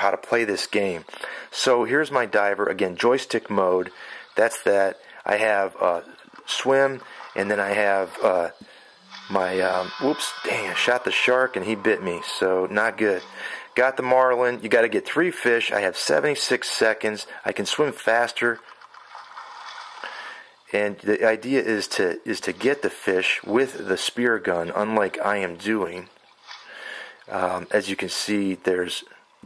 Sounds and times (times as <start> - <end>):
Speech: 0.0 - 8.6, 9.3 - 18.6, 20.7 - 26.1, 27.3 - 29.4.